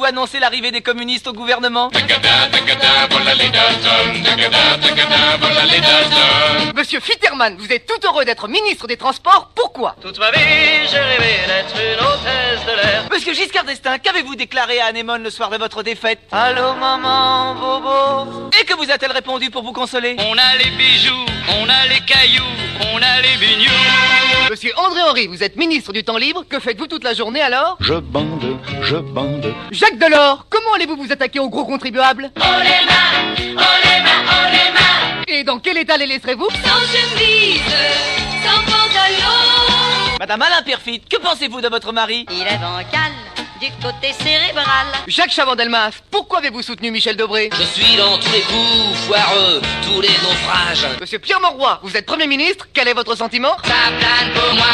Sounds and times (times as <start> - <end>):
Speech: 0.0 - 2.0, 6.8 - 10.2, 13.1 - 16.6, 18.5 - 20.2, 24.5 - 32.4, 35.3 - 36.6, 40.2 - 53.6
Music: 1.9 - 6.8, 10.2 - 13.1, 16.4 - 18.6, 20.2 - 24.5, 27.8 - 29.7, 32.4 - 35.3, 36.5 - 40.2, 42.3 - 45.1, 47.5 - 51.0, 53.6 - 54.7.